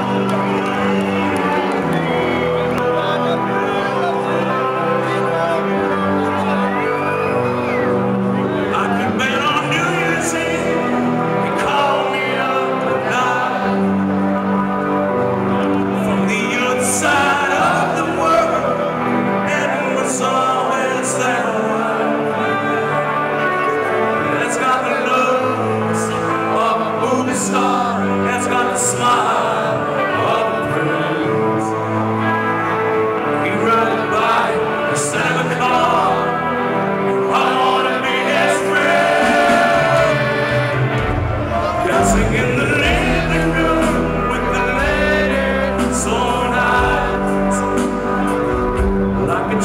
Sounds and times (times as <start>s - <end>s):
Music: 0.0s - 49.6s.